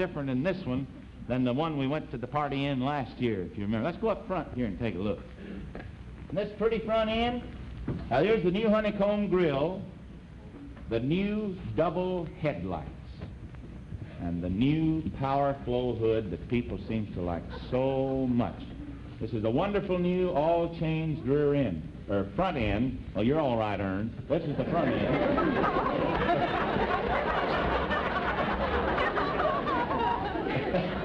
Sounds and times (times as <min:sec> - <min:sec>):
Speech: 0:00.0 - 0:05.3, 0:06.3 - 0:07.5, 0:08.1 - 0:09.9, 0:10.9 - 0:13.3, 0:14.2 - 0:25.4.